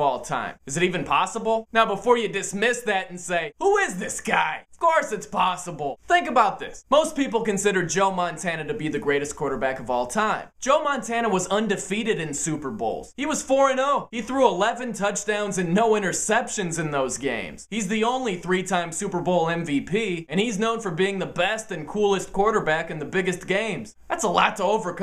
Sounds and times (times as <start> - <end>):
Speech: 0.0 - 25.0.